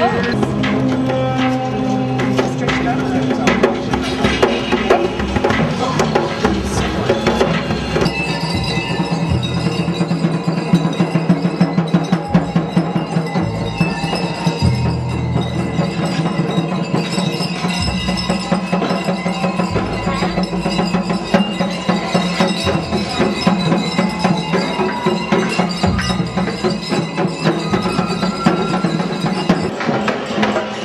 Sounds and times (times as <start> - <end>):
Music: 0.0 - 30.8.